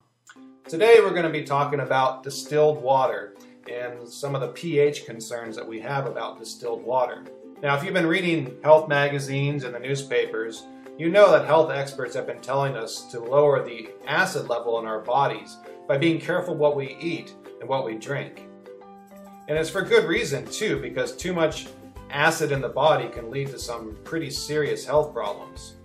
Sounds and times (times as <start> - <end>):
Music: 0.0 - 25.8
Speech: 0.7 - 18.4, 19.5 - 25.8.